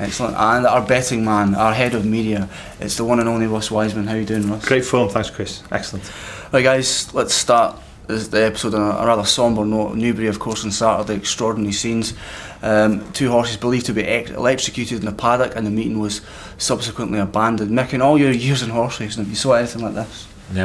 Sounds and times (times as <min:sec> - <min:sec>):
Speech: 0:00.0 - 0:20.6.